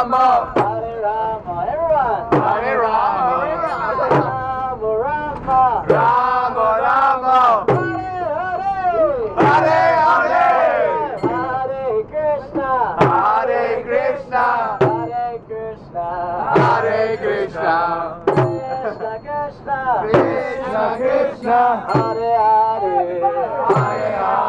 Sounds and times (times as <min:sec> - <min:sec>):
Mantra: 0:00.0 - 0:24.4.